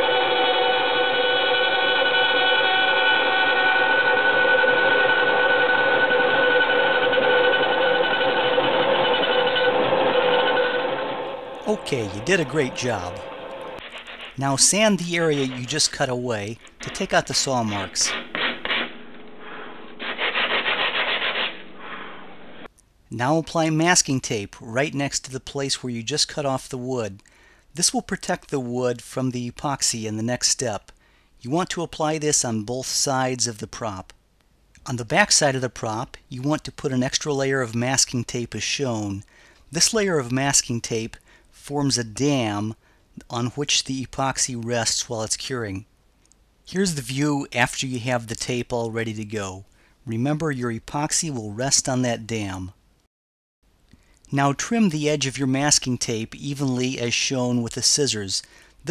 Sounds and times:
Speech: 0:11.6 - 0:13.2, 0:14.4 - 0:18.2, 0:23.1 - 0:27.2, 0:27.8 - 0:34.2, 0:34.8 - 0:45.9, 0:46.7 - 0:52.8, 0:54.3 - 0:58.9.

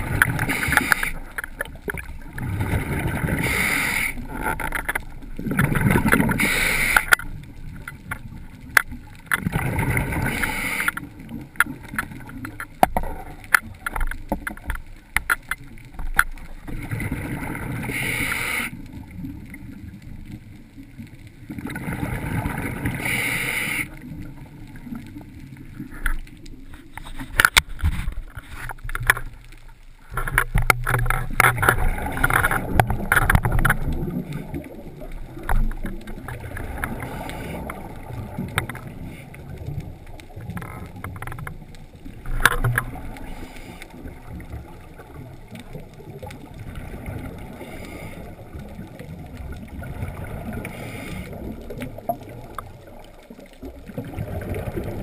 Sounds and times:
Rowboat, canoe, kayak: 0:00.0 - 0:55.0.

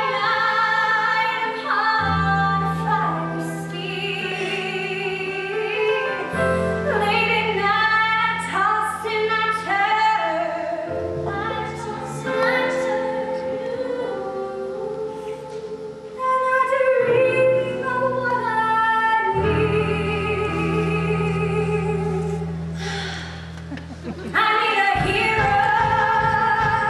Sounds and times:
Music: 0:00.0 - 0:26.8.

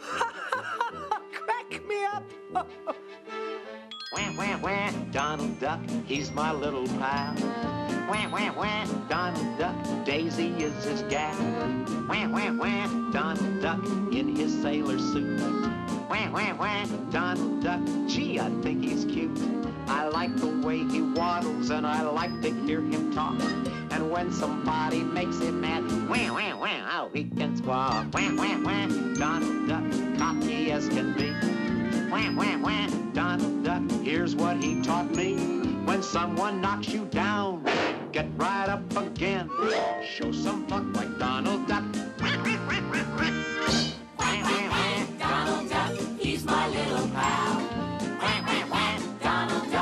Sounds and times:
Music: 0:00.0 - 0:49.8.

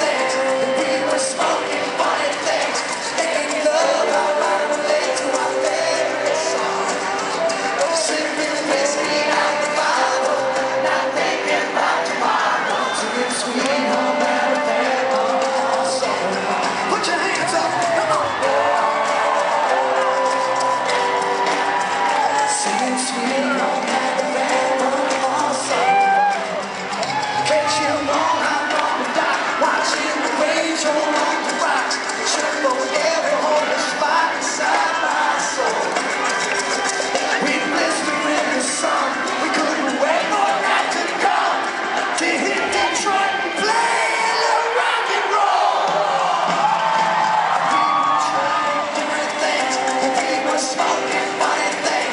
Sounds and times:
Music: 0:00.0 - 0:52.1
Singing: 0:00.0 - 0:52.1.

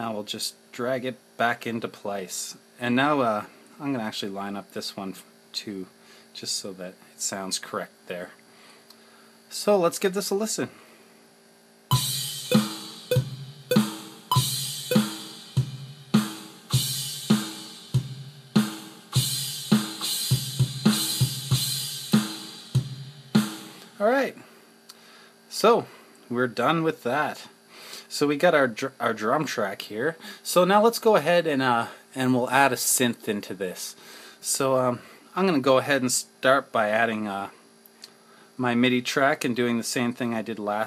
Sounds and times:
Cymbal: 0:11.9 - 0:24.0.

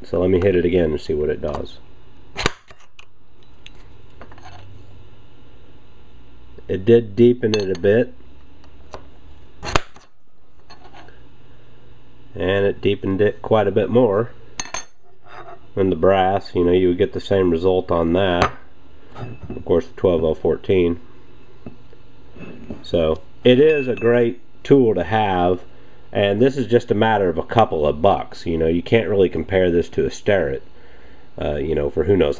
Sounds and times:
Speech: 0:00.0 - 0:01.9, 0:06.6 - 0:08.2, 0:12.3 - 0:14.4, 0:15.8 - 0:18.6, 0:19.5 - 0:21.0, 0:22.7 - 0:30.7, 0:31.4 - 0:32.3
Tools: 0:02.4 - 0:04.7, 0:09.6 - 0:11.1.

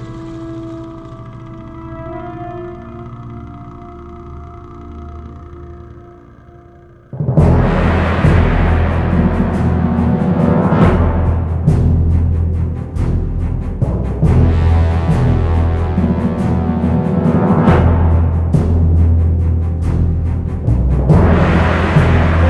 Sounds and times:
Jazz: 0:00.0 - 0:22.4.

